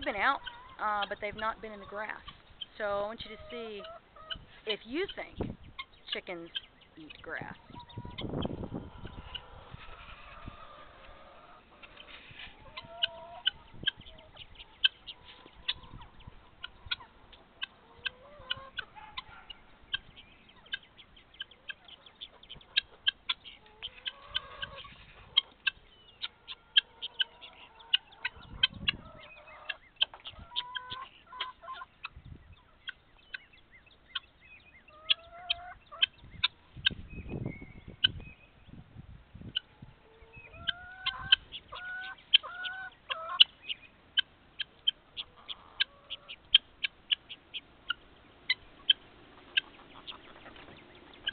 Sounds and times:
Chicken, rooster: 0:00.0 - 0:02.4, 0:03.0 - 0:06.2, 0:07.1 - 0:38.2, 0:39.4 - 0:51.3
Bird: 0:00.0 - 0:51.3.

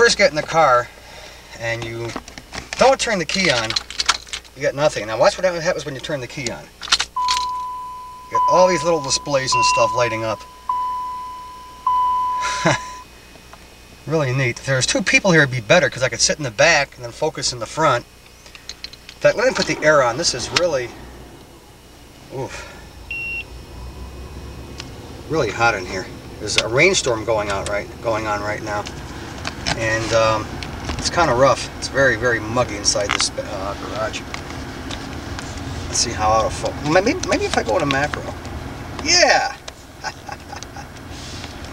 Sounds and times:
Speech: 0:00.0 - 0:00.9, 0:01.6 - 0:02.2, 0:02.8 - 0:03.8, 0:04.6 - 0:06.7, 0:08.3 - 0:10.4, 0:14.0 - 0:18.1, 0:19.2 - 0:21.0, 0:22.3 - 0:22.7, 0:25.3 - 0:28.9, 0:29.7 - 0:34.2, 0:35.9 - 0:38.4, 0:39.0 - 0:39.6.

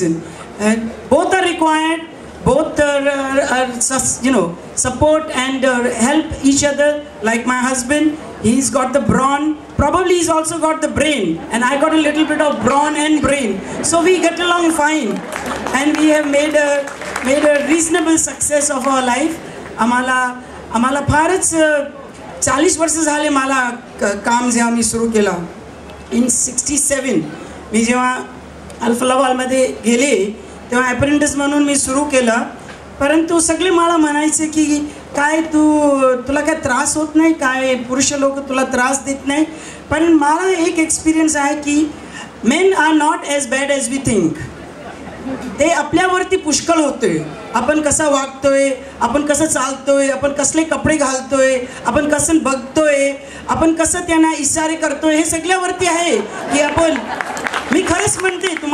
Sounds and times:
Female speech, woman speaking: 0:00.0 - 0:44.5, 0:45.6 - 0:57.1, 0:57.7 - 0:58.7
Narration, monologue: 0:00.0 - 0:58.7.

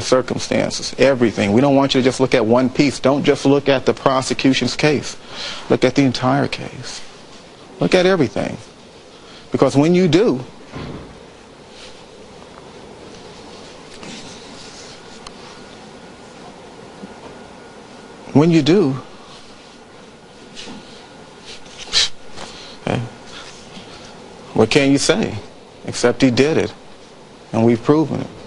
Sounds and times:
Speech: 0:00.0 - 0:07.1, 0:07.8 - 0:08.7, 0:09.5 - 0:10.5, 0:18.3 - 0:19.1, 0:22.8 - 0:23.2, 0:24.6 - 0:26.8, 0:27.5 - 0:28.4
Inside, large room or hall: 0:10.4 - 0:17.2.

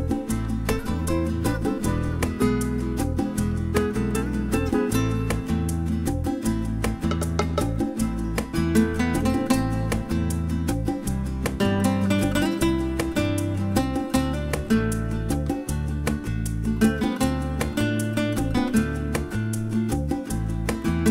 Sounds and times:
Acoustic guitar: 0:00.0 - 0:21.1.

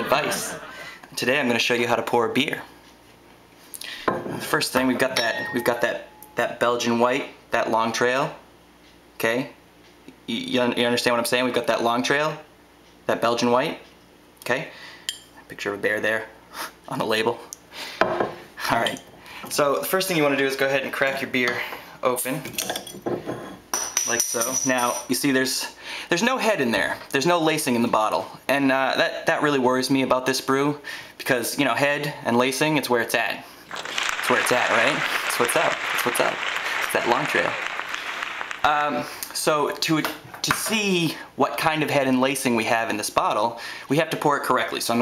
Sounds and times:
Speech: 0:00.0 - 0:02.8, 0:04.4 - 0:08.4, 0:09.2 - 0:09.6, 0:10.3 - 0:12.5, 0:13.1 - 0:14.8, 0:15.5 - 0:17.5, 0:18.6 - 0:22.6, 0:24.1 - 0:33.5, 0:34.2 - 0:37.6, 0:38.6 - 0:45.0.

